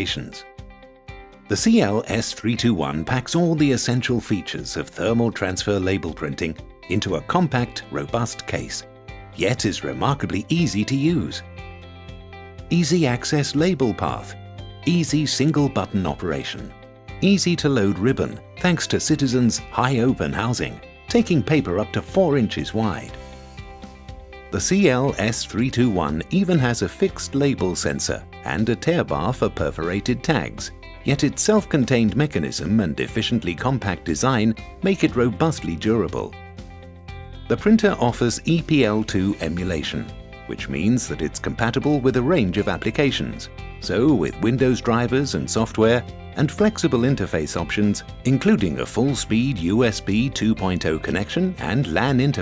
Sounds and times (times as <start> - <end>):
Speech: 0.0 - 0.5, 1.5 - 8.8, 9.4 - 11.4, 12.7 - 23.2, 24.6 - 36.4, 37.5 - 52.4
Music: 0.0 - 52.4.